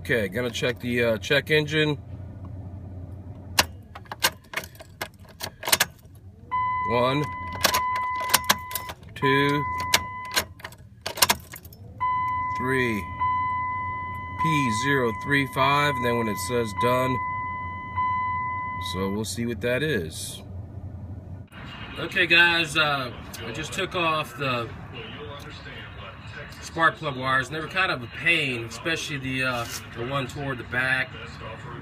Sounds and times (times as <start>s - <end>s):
Speech: 0.0s - 2.0s, 12.6s - 13.1s, 14.4s - 17.2s, 18.8s - 20.4s, 21.7s - 31.8s.